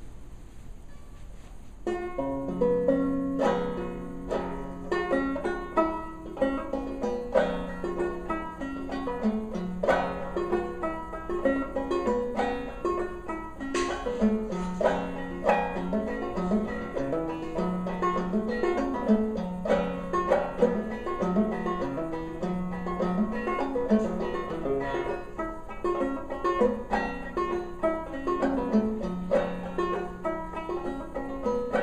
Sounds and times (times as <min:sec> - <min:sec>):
Banjo: 0:01.8 - 0:31.8.